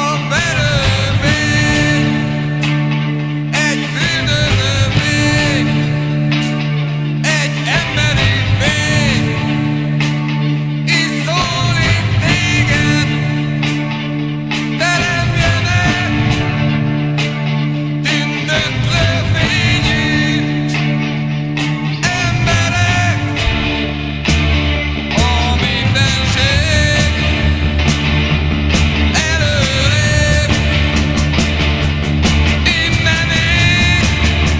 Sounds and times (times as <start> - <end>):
Music: 0.0 - 34.5.